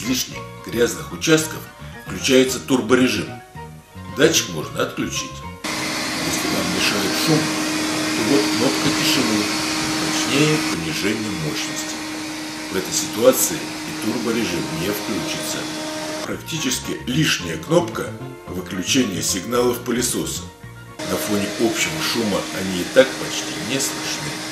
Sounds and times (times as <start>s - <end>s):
Speech: 0.0s - 3.4s, 4.1s - 5.5s, 6.2s - 12.0s, 12.7s - 15.7s, 16.3s - 24.5s
Music: 0.0s - 24.5s
Vacuum cleaner: 5.7s - 16.3s, 21.0s - 24.5s.